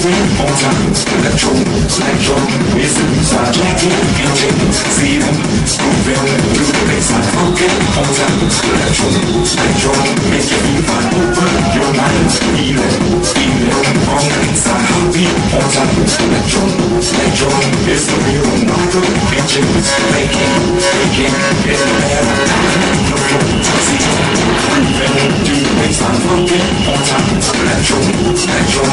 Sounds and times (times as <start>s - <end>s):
Dance music: 0.0s - 28.9s.